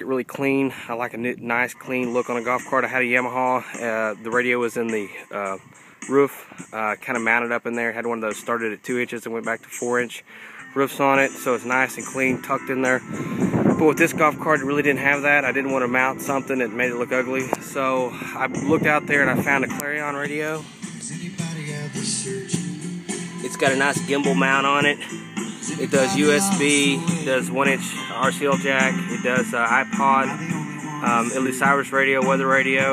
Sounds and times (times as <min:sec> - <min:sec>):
Speech: 0:00.0 - 0:10.2, 0:10.8 - 0:13.0, 0:13.8 - 0:20.6, 0:23.4 - 0:25.0, 0:25.7 - 0:30.4, 0:31.0 - 0:32.9
Music: 0:00.0 - 0:32.9.